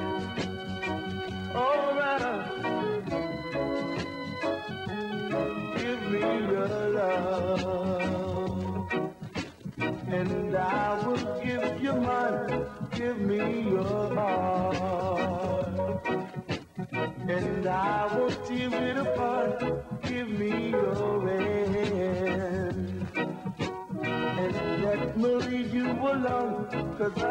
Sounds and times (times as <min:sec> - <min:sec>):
Music: 0:00.0 - 0:27.3.